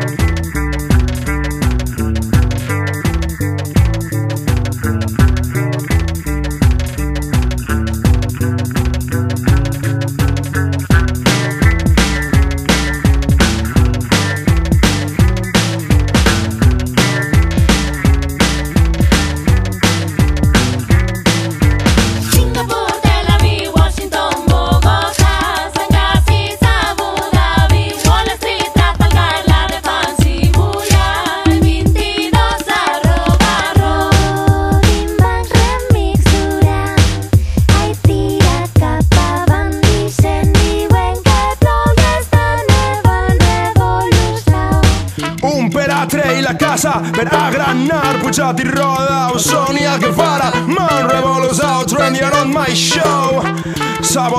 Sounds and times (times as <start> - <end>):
Music: 0.0 - 54.3.